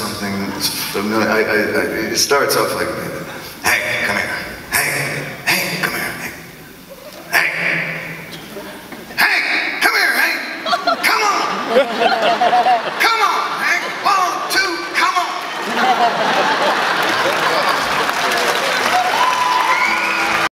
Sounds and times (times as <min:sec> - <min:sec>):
Speech: 0:00.0 - 0:06.4, 0:07.3 - 0:11.7, 0:13.0 - 0:15.5
Music: 0:19.3 - 0:20.5.